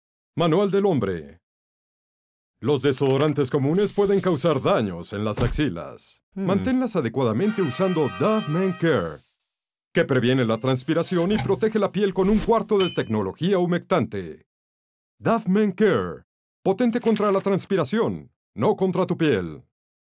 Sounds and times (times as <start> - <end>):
Speech: 0.4 - 1.4, 2.6 - 9.2, 10.0 - 14.5, 15.2 - 19.7.